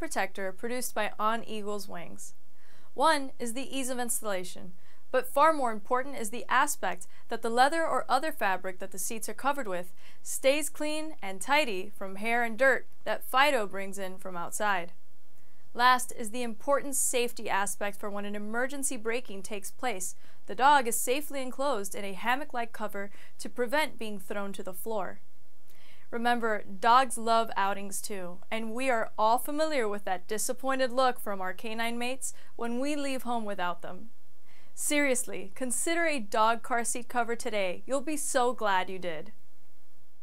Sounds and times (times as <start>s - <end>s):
Speech: 0.0s - 2.3s, 3.0s - 14.9s, 15.8s - 25.2s, 26.1s - 34.1s, 34.8s - 39.3s.